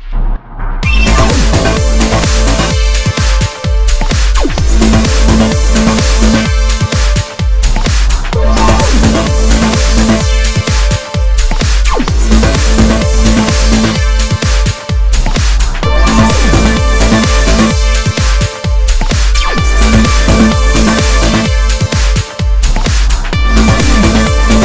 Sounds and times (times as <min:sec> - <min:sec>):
Trance music: 0:00.0 - 0:24.6.